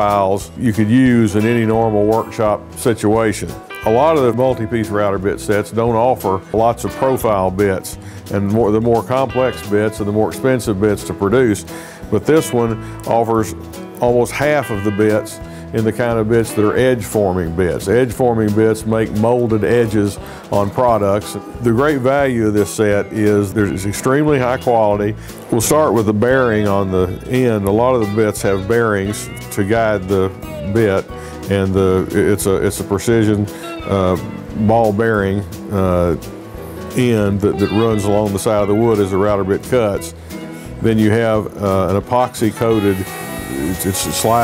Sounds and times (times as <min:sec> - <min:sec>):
Speech: 0:00.0 - 0:36.3, 0:36.9 - 0:40.2, 0:40.8 - 0:44.4
Music: 0:00.0 - 0:44.4.